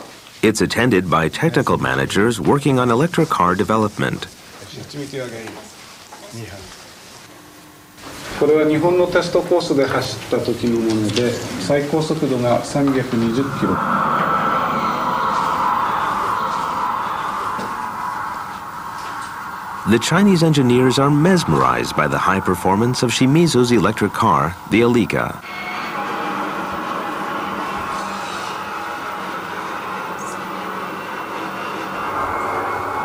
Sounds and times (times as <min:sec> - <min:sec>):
Speech: 0:00.4 - 0:05.7, 0:08.4 - 0:13.8, 0:19.9 - 0:25.4
Car passing by: 0:12.0 - 0:23.8.